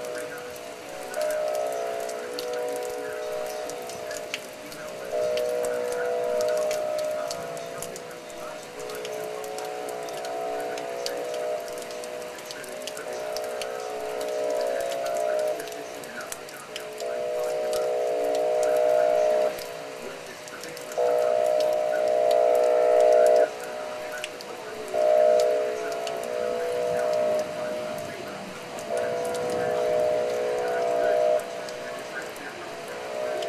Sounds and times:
Siren: 0.0 - 33.4
Speech: 0.0 - 33.4.

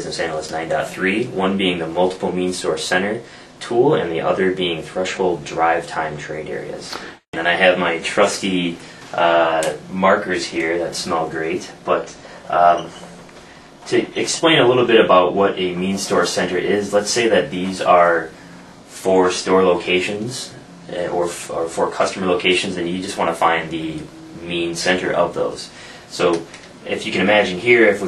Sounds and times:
Speech: 0.0 - 13.2, 13.9 - 28.0.

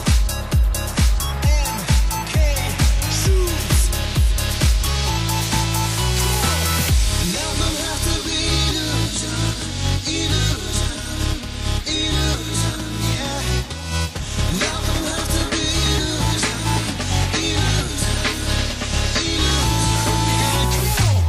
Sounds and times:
Music: 0.0 - 21.2.

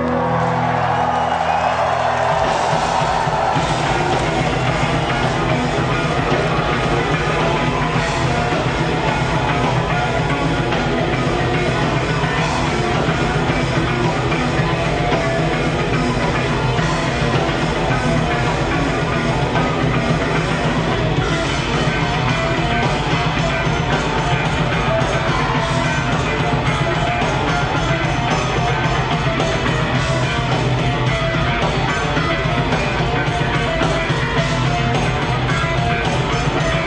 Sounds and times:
Music: 0.0 - 36.8.

